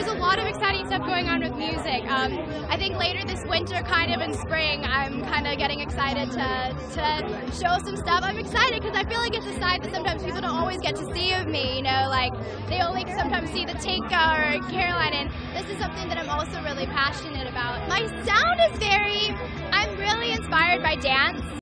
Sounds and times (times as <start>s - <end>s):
Music: 0.0s - 21.6s
Speech: 0.0s - 21.6s.